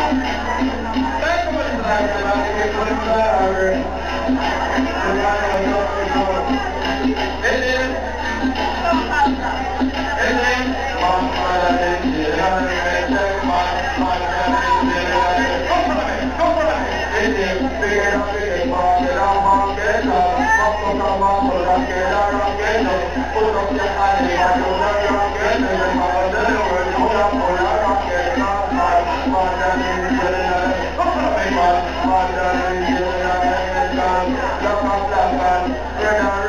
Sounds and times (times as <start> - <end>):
Music: 0.0 - 36.4.